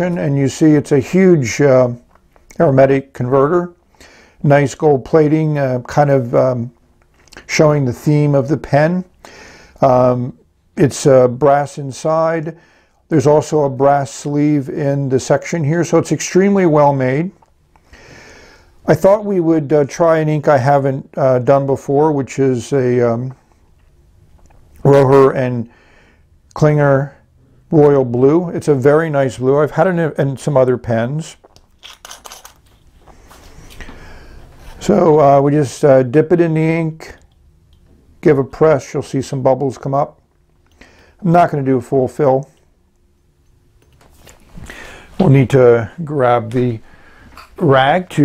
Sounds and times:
Speech: 0.0s - 3.8s, 4.4s - 9.1s, 9.8s - 17.4s, 18.8s - 23.4s, 24.8s - 25.7s, 26.5s - 31.4s, 34.8s - 37.3s, 38.2s - 40.2s, 41.2s - 42.6s, 45.2s - 46.8s, 47.6s - 48.2s
Inside, small room: 0.0s - 48.2s.

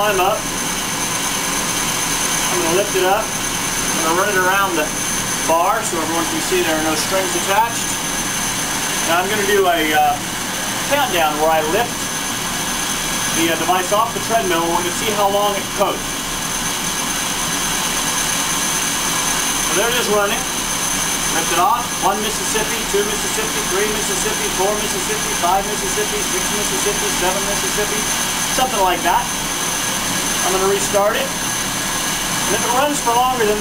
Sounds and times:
Speech: 0.0s - 0.4s, 2.5s - 3.3s, 3.9s - 8.0s, 9.0s - 10.2s, 10.9s - 12.0s, 13.3s - 16.1s, 19.7s - 20.5s, 21.3s - 29.4s, 30.4s - 31.4s, 32.5s - 33.6s.

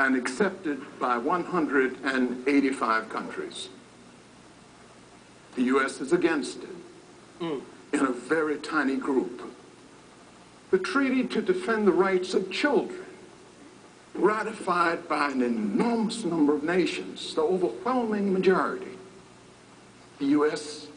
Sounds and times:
Speech: 0.0s - 3.8s, 5.6s - 9.6s, 10.7s - 13.2s, 14.2s - 19.1s, 20.2s - 20.9s.

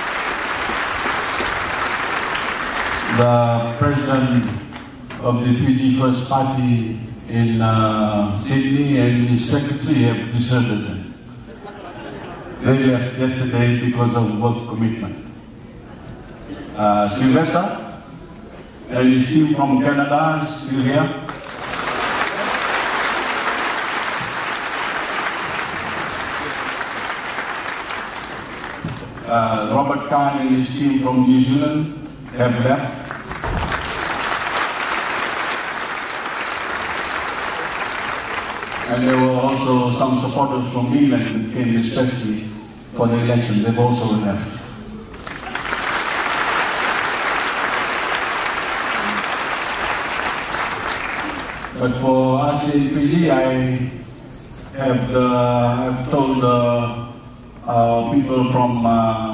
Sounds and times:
Male speech, man speaking: 3.1s - 4.6s, 5.2s - 11.1s, 12.6s - 15.2s, 16.8s - 17.9s, 18.9s - 21.3s, 29.3s - 33.0s, 38.9s - 44.6s, 51.8s - 54.0s, 54.8s - 59.3s.

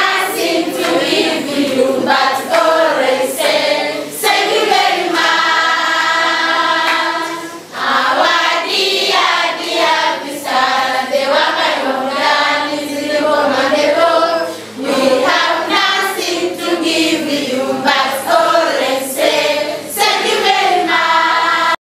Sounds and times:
Child singing: 0.0s - 21.8s
Choir: 0.0s - 21.8s.

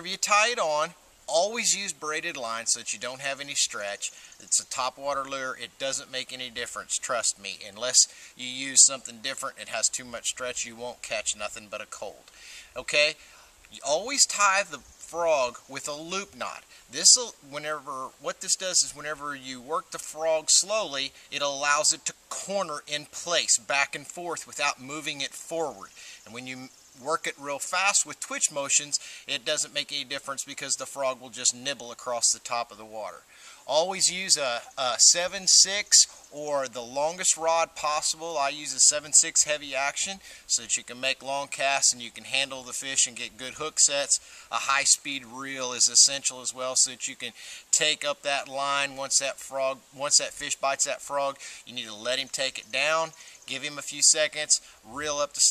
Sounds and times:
Speech: 0.0s - 55.5s.

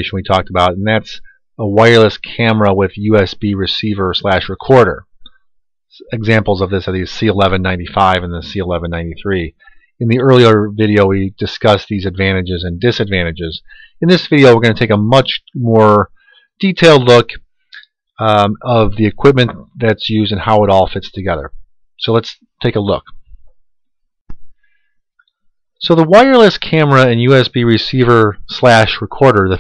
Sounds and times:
Speech: 0.0s - 5.1s, 6.0s - 17.4s, 18.2s - 23.2s, 25.8s - 29.6s.

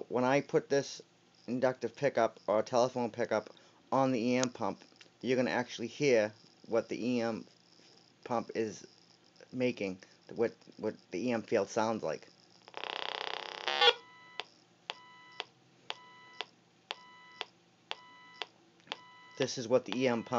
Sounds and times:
Speech: 0.1s - 7.4s, 8.3s - 8.8s, 9.6s - 12.2s, 19.4s - 20.3s
Beep, bleep: 17.0s - 17.4s, 18.0s - 18.4s, 19.0s - 19.4s, 20.1s - 20.3s.

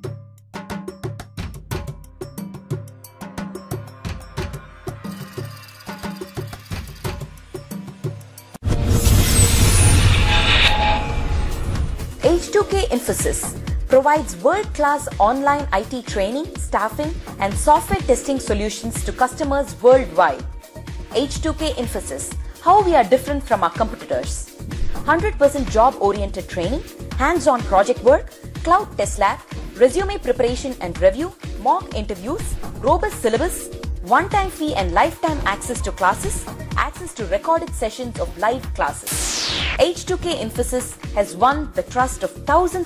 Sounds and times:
Music: 0.0s - 42.8s
Speech: 12.2s - 20.5s, 21.1s - 24.5s, 25.1s - 39.1s, 39.8s - 42.8s.

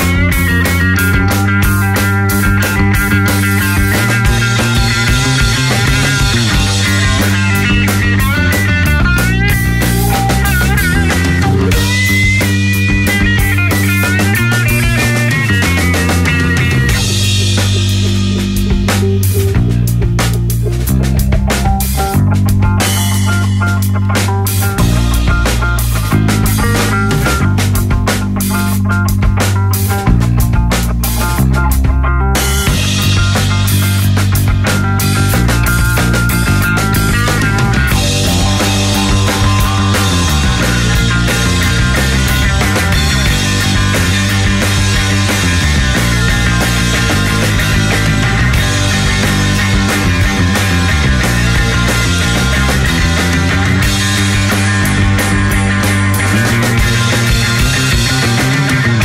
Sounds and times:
Progressive rock: 0.0s - 59.0s.

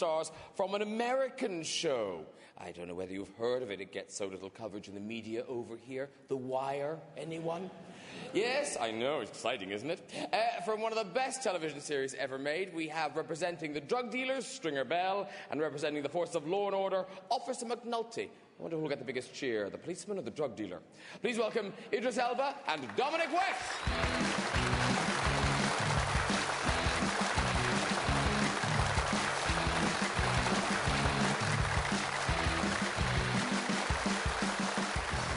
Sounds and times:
Speech: 0.0s - 23.7s
Music: 23.7s - 35.3s.

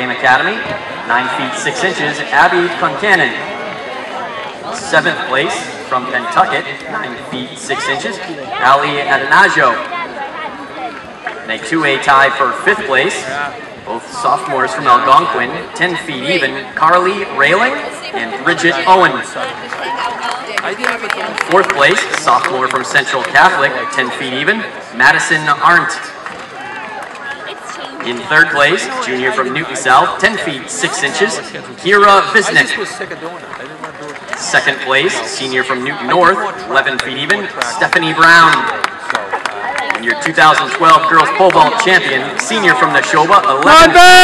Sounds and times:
Speech: 4.6s - 26.2s, 27.5s - 44.2s.

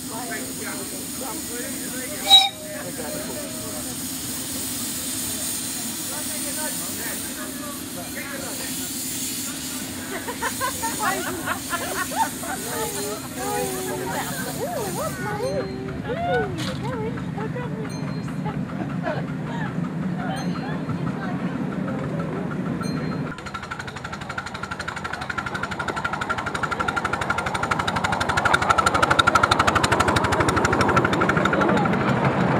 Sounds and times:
Speech: 0.0s - 9.0s, 12.5s - 18.5s.

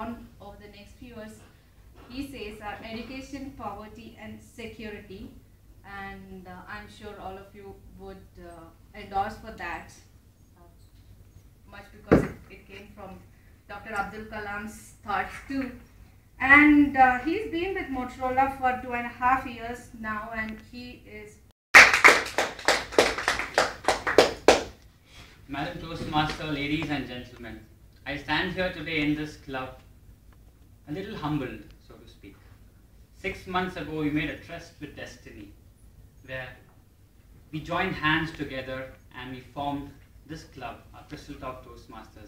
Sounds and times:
Female speech, woman speaking: 0.0s - 10.8s, 11.7s - 15.8s, 16.4s - 21.5s.

